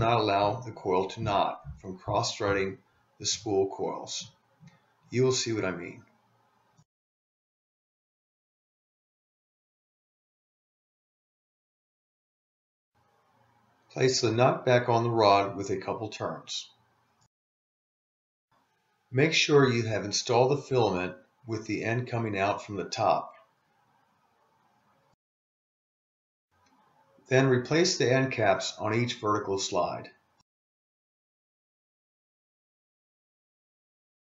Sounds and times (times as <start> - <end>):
Speech: 0.0 - 4.3, 5.2 - 6.1, 14.0 - 16.8, 19.2 - 23.4, 27.3 - 30.2.